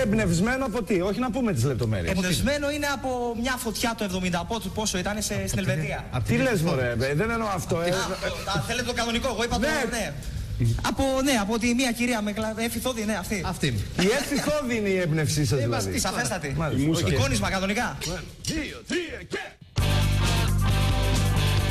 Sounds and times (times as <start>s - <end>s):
Speech: 0.0s - 19.6s.